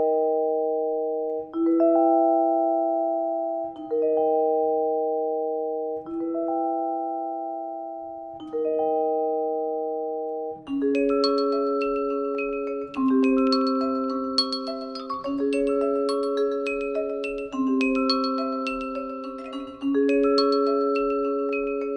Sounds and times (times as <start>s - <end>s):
Glockenspiel: 0.0s - 21.9s.